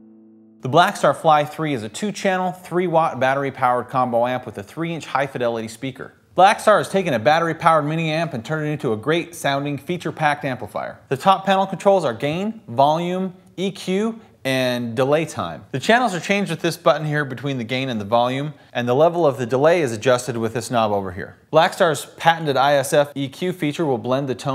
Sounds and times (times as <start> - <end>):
Speech: 0.6 - 24.5.